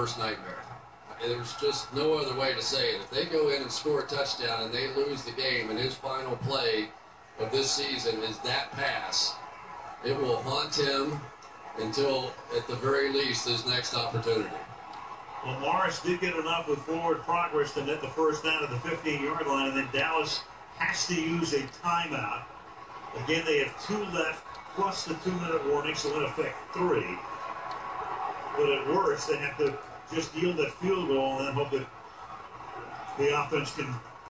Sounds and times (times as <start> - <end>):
Speech: 0.0 - 9.4, 10.0 - 14.7, 15.4 - 22.5, 23.1 - 27.3, 28.6 - 31.9, 33.1 - 34.2.